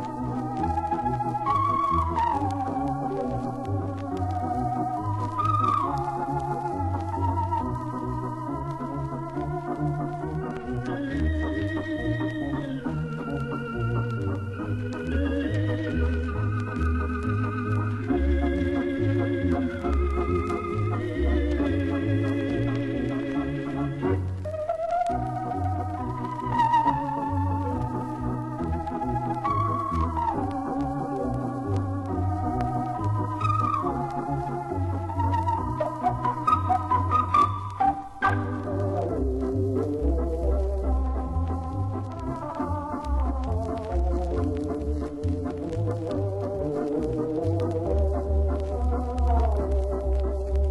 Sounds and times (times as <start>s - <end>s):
Hammond organ: 0.0s - 50.7s.